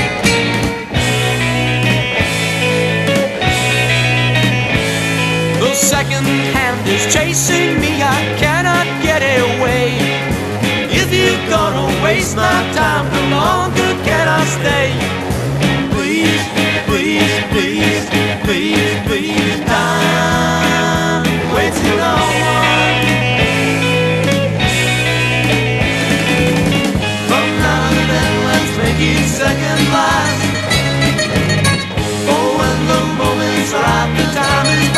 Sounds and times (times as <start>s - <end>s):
Independent music: 0.0s - 34.9s.